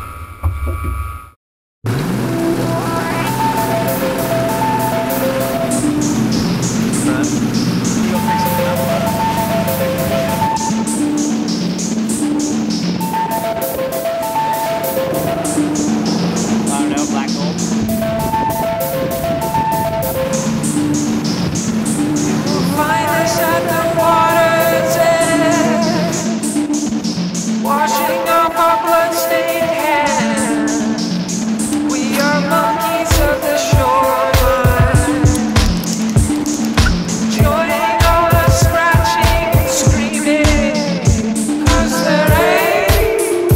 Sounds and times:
Music: 0.0 - 43.5.

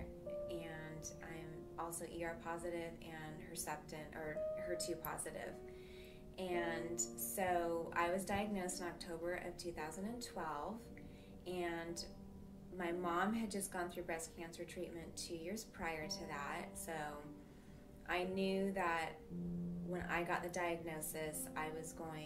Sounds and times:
Speech: 0.0 - 5.6, 6.4 - 10.9, 11.5 - 12.1, 12.8 - 17.3, 18.1 - 19.2, 19.8 - 22.2
Music: 0.0 - 22.2.

